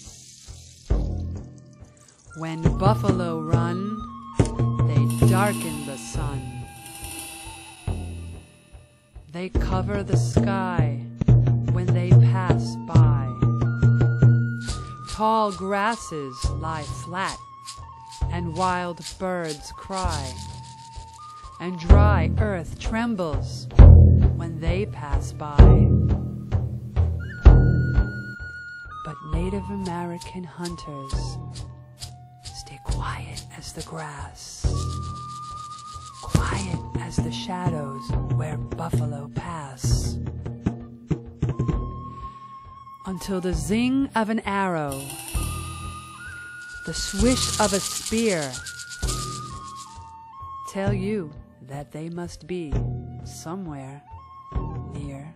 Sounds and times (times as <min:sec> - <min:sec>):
Music: 0:00.0 - 0:55.3
Speech: 0:02.4 - 0:04.0, 0:04.8 - 0:06.6, 0:09.3 - 0:11.0, 0:11.7 - 0:13.4, 0:15.0 - 0:17.4, 0:18.3 - 0:20.4, 0:21.6 - 0:23.7, 0:24.4 - 0:26.0, 0:29.1 - 0:31.4, 0:32.6 - 0:34.8, 0:36.2 - 0:40.2, 0:43.1 - 0:45.2, 0:46.9 - 0:48.6, 0:50.7 - 0:54.1, 0:54.8 - 0:55.3.